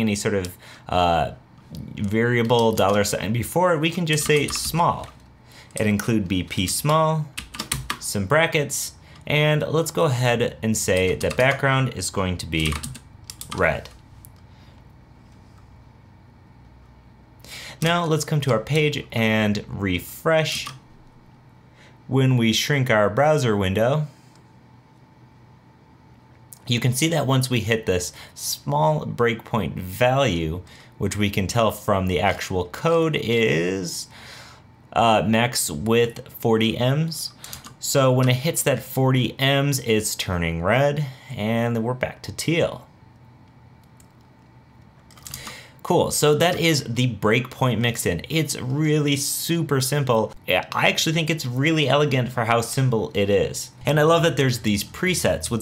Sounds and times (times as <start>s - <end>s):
Speech: 0.0s - 5.2s, 5.8s - 7.4s, 8.0s - 14.0s, 17.8s - 20.8s, 22.1s - 24.1s, 26.6s - 34.1s, 34.9s - 42.9s, 45.8s - 55.6s
Computer keyboard: 2.4s - 3.1s, 4.1s - 5.2s, 7.4s - 8.0s, 10.9s - 11.6s, 12.6s - 14.0s, 45.1s - 45.5s.